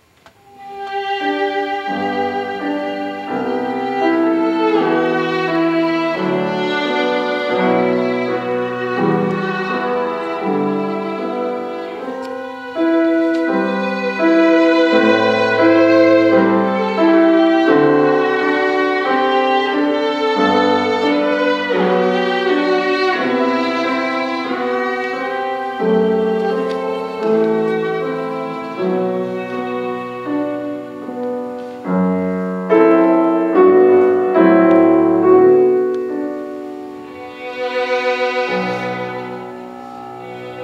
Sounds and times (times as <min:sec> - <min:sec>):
Violin, fiddle: 0:00.3 - 0:40.6.